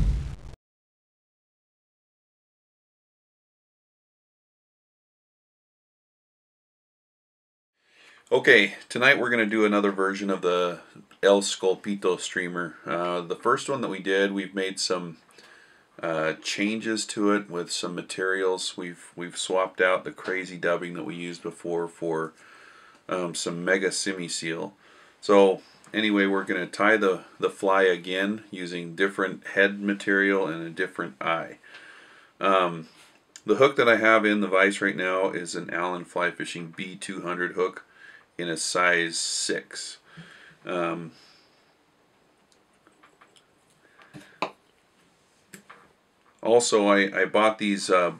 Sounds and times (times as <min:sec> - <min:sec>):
Speech: 0:08.3 - 0:15.2, 0:16.0 - 0:22.4, 0:23.1 - 0:31.6, 0:32.4 - 0:40.0, 0:40.6 - 0:41.2, 0:46.4 - 0:48.1.